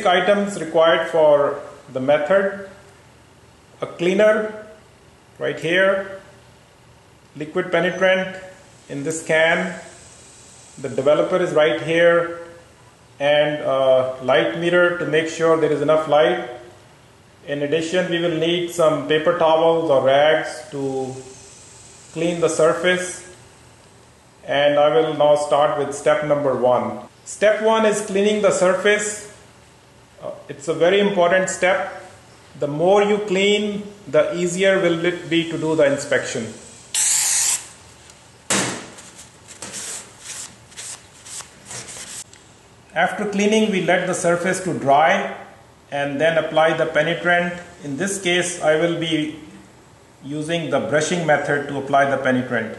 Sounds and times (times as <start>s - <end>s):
Speech: 0.0s - 2.8s, 3.8s - 4.8s, 5.4s - 6.3s, 7.4s - 10.0s, 10.8s - 12.6s, 13.2s - 16.7s, 17.4s - 21.3s, 22.2s - 23.4s, 24.4s - 29.4s, 30.2s - 36.7s, 42.9s - 49.6s, 50.2s - 52.7s.